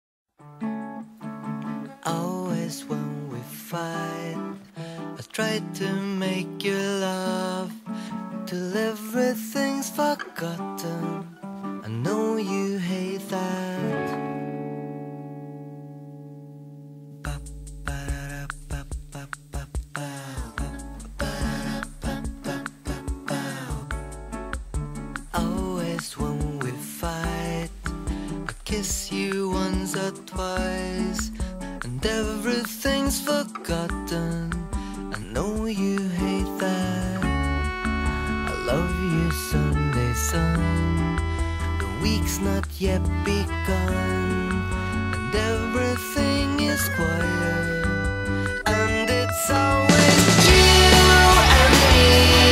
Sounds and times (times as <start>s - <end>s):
Music: 0.3s - 52.5s.